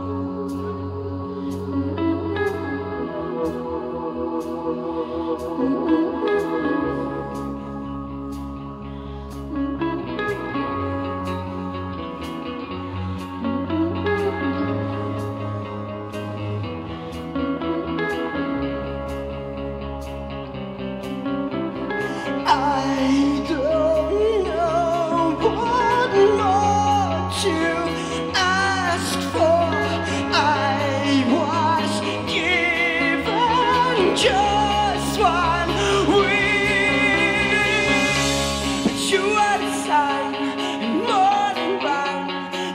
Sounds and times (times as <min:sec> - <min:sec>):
Electronic music: 0:00.0 - 0:42.7.